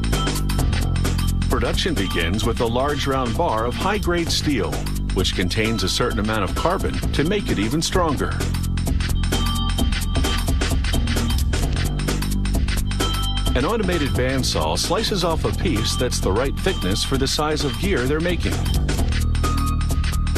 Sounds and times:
Music: 0.0s - 20.3s
Speech: 1.5s - 8.4s, 13.6s - 18.7s.

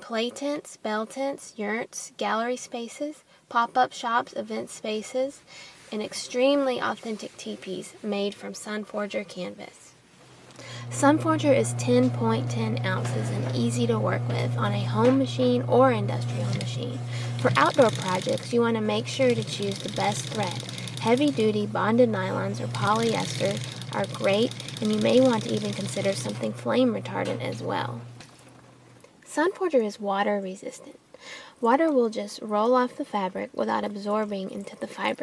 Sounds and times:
Speech: 0.0s - 10.0s, 10.9s - 28.0s, 29.3s - 31.0s, 31.6s - 35.2s.

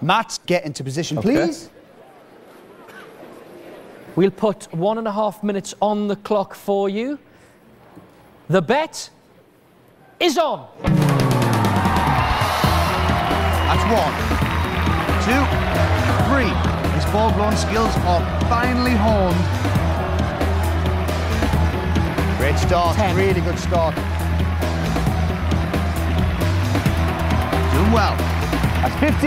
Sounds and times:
Music: 10.9s - 29.2s.

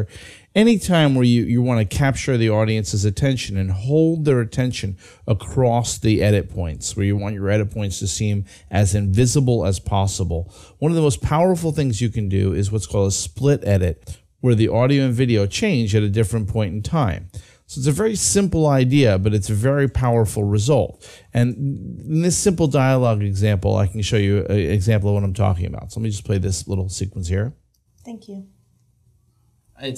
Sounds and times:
Speech: 0.0s - 28.5s.

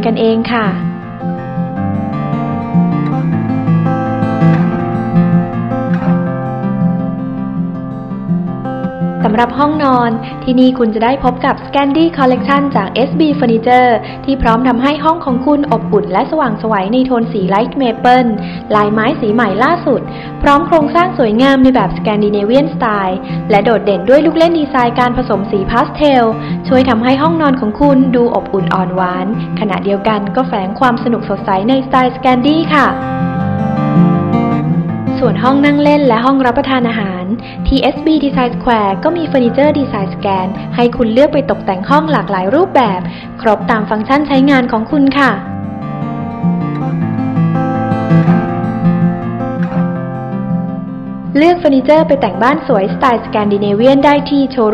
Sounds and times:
Speech: 0.0s - 0.8s, 9.3s - 33.0s, 35.2s - 45.4s, 51.4s - 54.7s
Music: 0.0s - 54.7s.

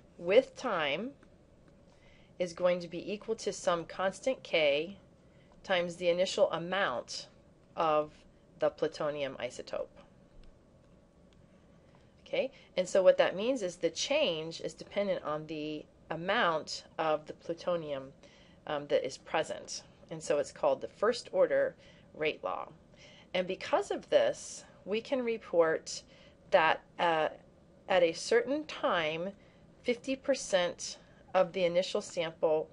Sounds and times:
Narration, monologue: 0.0s - 32.7s.

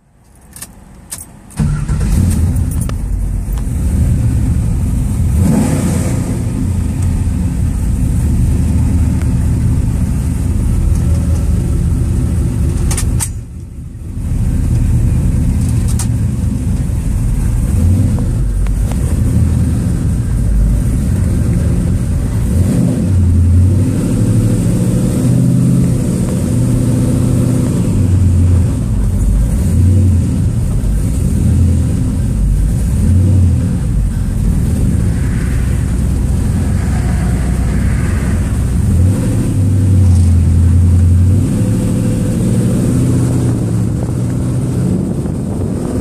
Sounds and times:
Car: 0.0s - 46.0s.

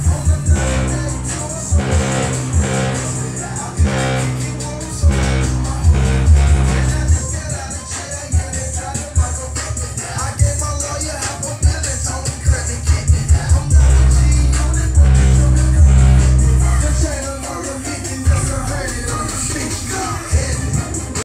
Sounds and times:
Music: 0.0s - 21.2s.

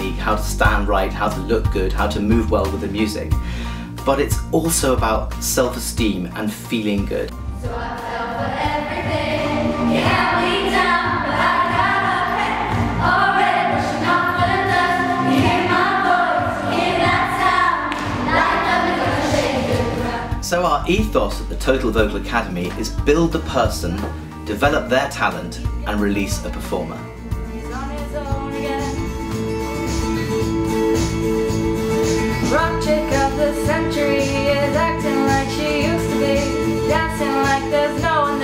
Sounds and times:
Speech: 0.0s - 3.3s, 4.0s - 7.3s, 20.4s - 27.1s
Music: 0.0s - 38.4s.

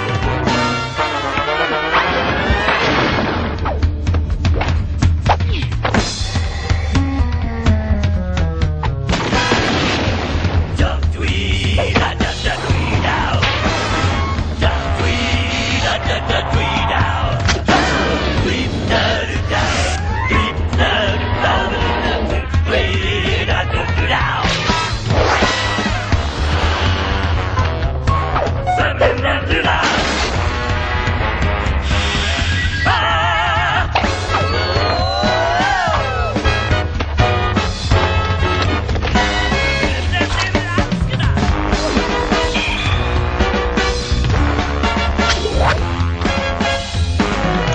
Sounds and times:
Music: 0.0s - 47.7s.

